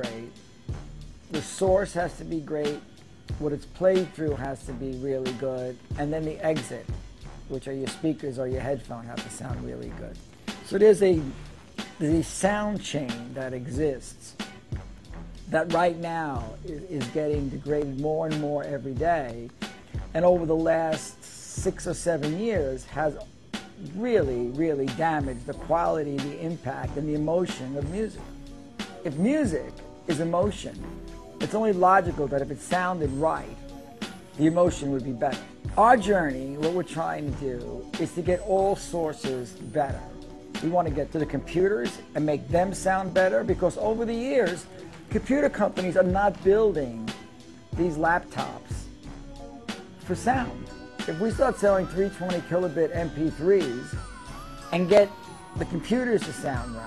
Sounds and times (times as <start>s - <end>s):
Speech: 0.0s - 0.4s, 1.3s - 6.9s, 7.5s - 11.4s, 12.0s - 14.4s, 15.5s - 19.5s, 20.1s - 28.3s, 29.0s - 33.6s, 34.4s - 47.2s, 47.8s - 48.9s, 50.0s - 54.0s, 54.7s - 56.8s
Music: 0.0s - 56.8s.